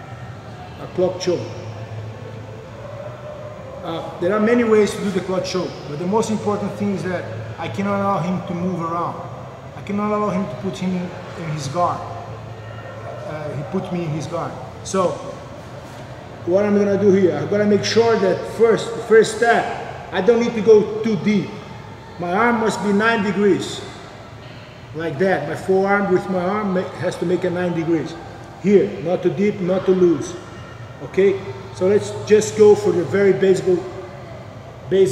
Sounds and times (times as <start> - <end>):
Speech: 0.8 - 1.6, 3.8 - 9.2, 9.8 - 12.2, 13.2 - 15.3, 16.4 - 24.0, 24.9 - 30.4, 31.0 - 33.9, 34.9 - 35.1.